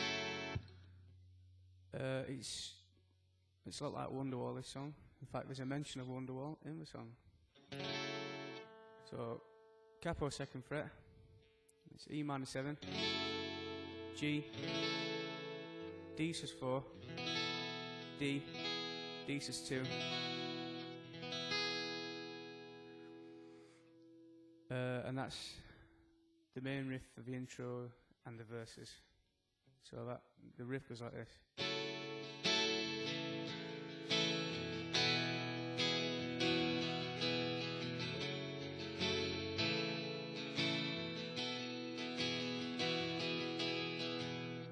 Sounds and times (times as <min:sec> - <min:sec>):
Music: 0:00.0 - 0:01.3, 0:07.5 - 0:10.4, 0:12.7 - 0:24.7, 0:31.6 - 0:44.7
Speech: 0:01.9 - 0:02.9, 0:03.7 - 0:07.2, 0:09.1 - 0:11.0, 0:11.9 - 0:12.8, 0:14.2 - 0:14.6, 0:16.2 - 0:17.0, 0:18.2 - 0:18.5, 0:19.3 - 0:20.1, 0:24.7 - 0:25.8, 0:26.6 - 0:29.1, 0:29.8 - 0:31.5.